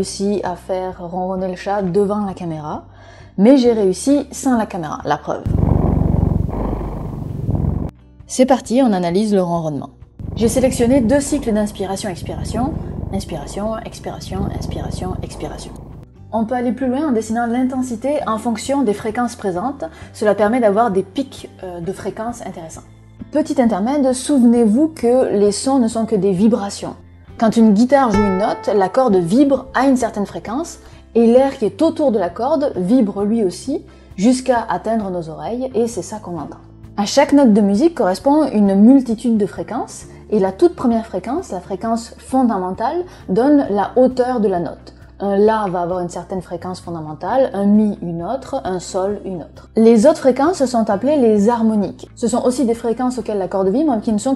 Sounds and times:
Female speech, woman speaking: 0:00.0 - 0:05.5, 0:08.3 - 0:54.3.

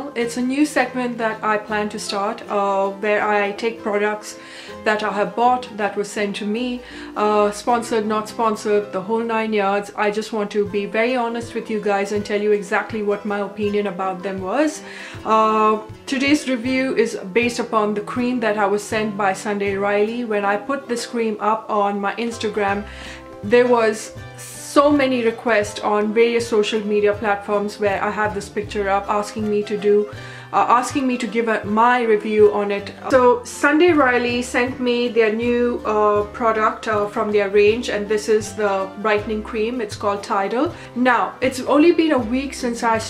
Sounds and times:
Music: 0:00.0 - 0:43.0
Speech: 0:00.0 - 0:43.0.

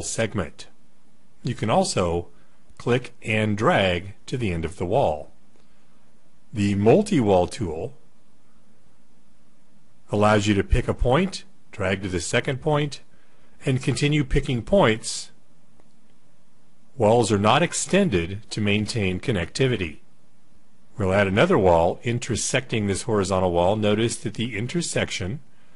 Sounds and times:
Speech: 0:00.0 - 0:00.8, 0:01.4 - 0:05.4, 0:06.5 - 0:08.0, 0:10.1 - 0:15.4, 0:17.0 - 0:20.1, 0:21.0 - 0:25.5.

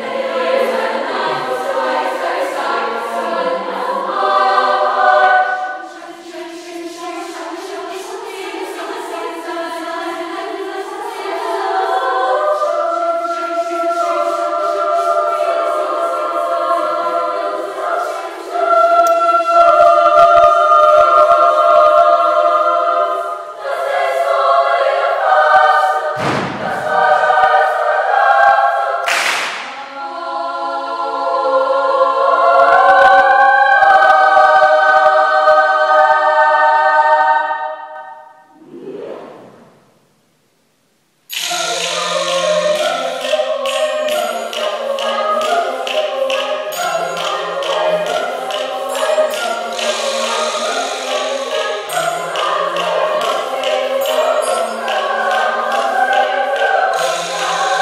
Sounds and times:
Choir: 0:00.0 - 0:40.0, 0:41.3 - 0:57.8.

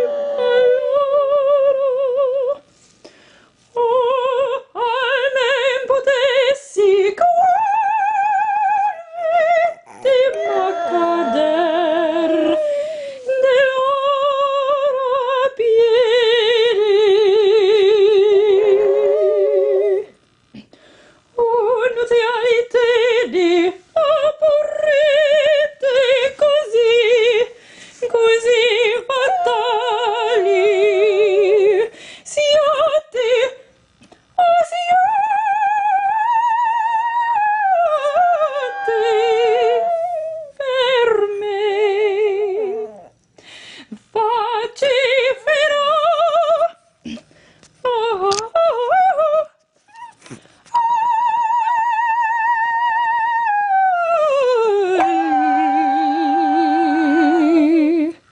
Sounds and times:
Female singing: 0:00.0 - 0:02.7, 0:03.8 - 0:20.2, 0:21.4 - 0:33.7, 0:34.4 - 0:43.1, 0:44.1 - 0:46.8, 0:47.8 - 0:49.6, 0:50.7 - 0:58.2.

